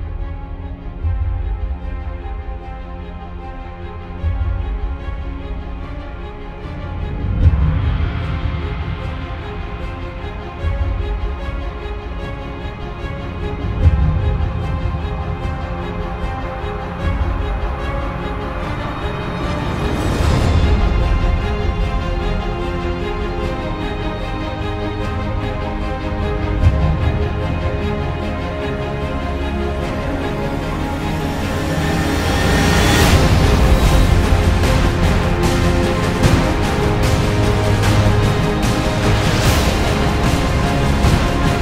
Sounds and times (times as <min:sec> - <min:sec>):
Music: 0:00.0 - 0:41.6.